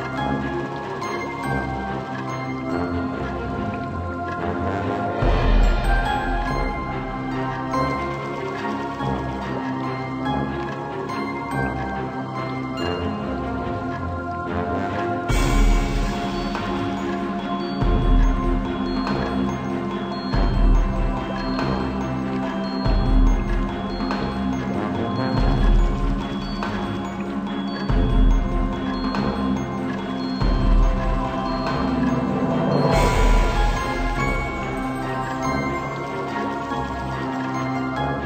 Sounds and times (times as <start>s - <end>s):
Music: 0.0s - 38.2s.